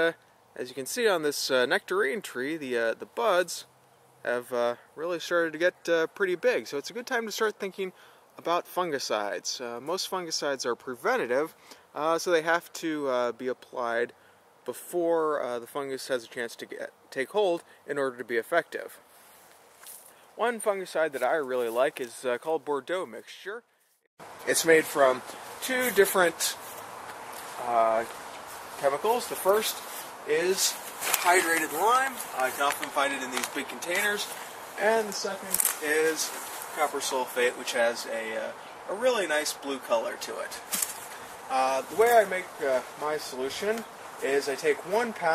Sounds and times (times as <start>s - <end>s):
Speech: 0.0s - 19.0s, 20.4s - 23.6s, 24.4s - 26.6s, 27.6s - 28.1s, 28.8s - 40.6s, 41.5s - 45.3s.